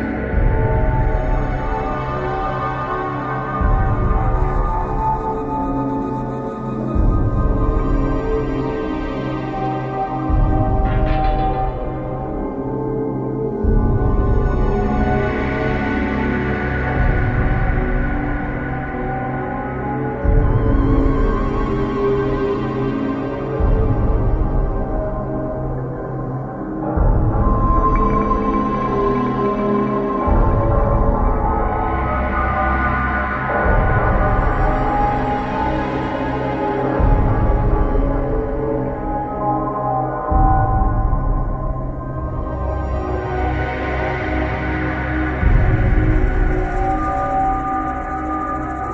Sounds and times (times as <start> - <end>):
Music: 0.0 - 48.9.